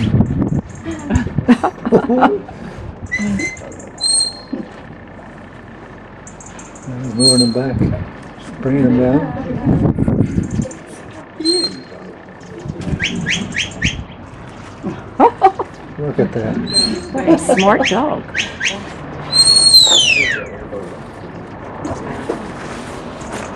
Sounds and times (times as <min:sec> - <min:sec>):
Outside, rural or natural: 0:00.0 - 0:23.5
Speech: 0:06.9 - 0:09.7, 0:16.0 - 0:18.9, 0:19.9 - 0:21.4.